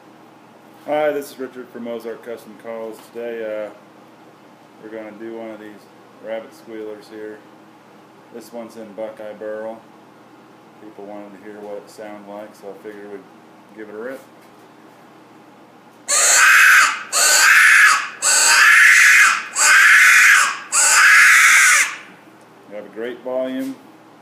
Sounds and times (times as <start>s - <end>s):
Speech: 0.9s - 3.8s, 4.8s - 7.5s, 8.3s - 9.9s, 10.8s - 14.3s, 22.7s - 23.8s.